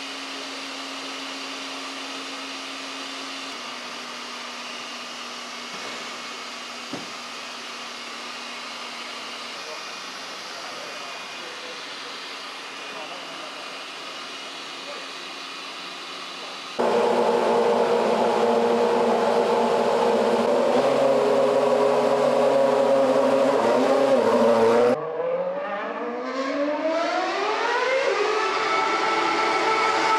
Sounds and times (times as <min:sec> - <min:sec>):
Speech: 0:09.5 - 0:13.8, 0:14.8 - 0:15.3.